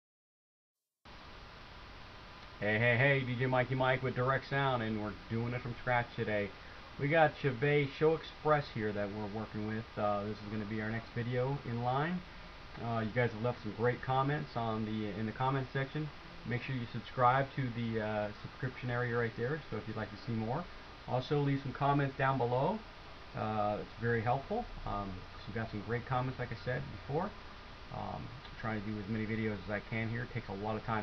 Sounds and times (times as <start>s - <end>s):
Speech: 2.6s - 31.0s.